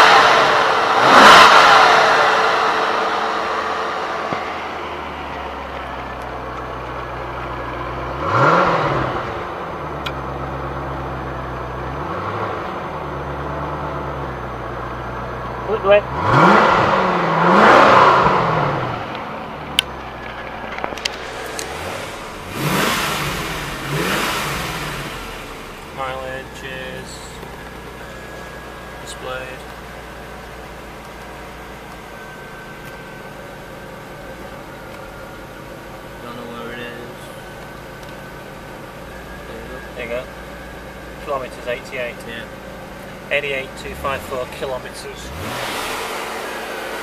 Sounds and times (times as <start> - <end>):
Accelerating, revving, vroom: 0.0 - 3.7, 8.1 - 9.4, 11.9 - 12.8, 16.1 - 19.1, 21.2 - 25.7, 45.2 - 47.0
Heavy engine (low frequency): 0.0 - 47.0
Vehicle: 0.0 - 47.0
Speech: 15.6 - 16.1, 25.9 - 27.4, 29.0 - 29.7, 36.2 - 37.3, 39.4 - 40.3, 41.2 - 42.5, 43.3 - 45.3.